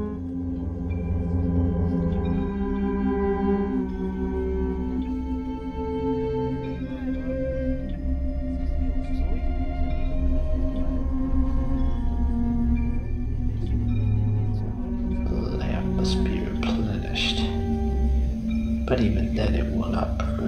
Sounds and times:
Music: 0.0 - 20.4
Narration, monologue: 13.6 - 20.4.

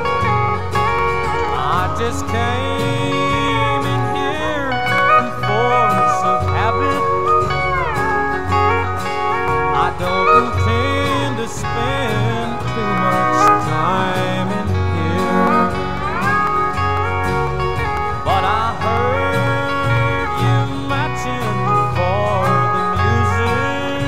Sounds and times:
Strum: 0.0 - 24.0.

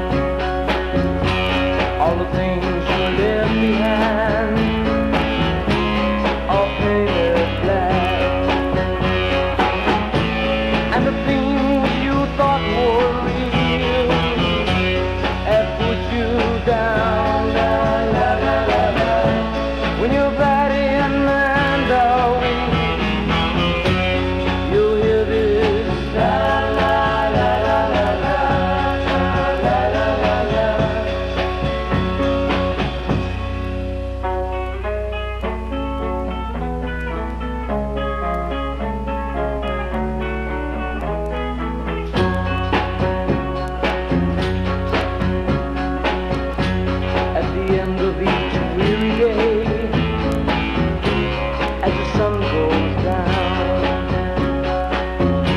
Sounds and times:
Music: 0.0 - 55.5.

